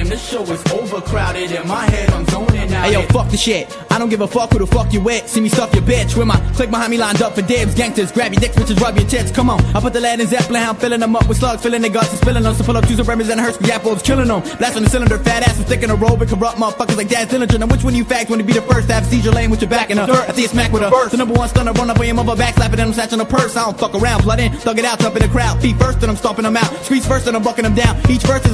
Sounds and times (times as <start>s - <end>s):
Music: 0.0s - 28.5s.